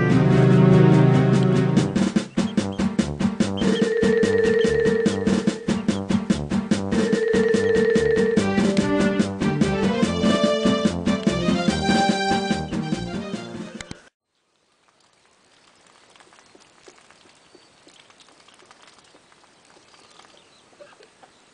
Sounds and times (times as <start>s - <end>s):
Music: 0.0s - 14.1s
Bird: 2.2s - 3.0s, 3.6s - 6.0s, 15.5s - 21.5s.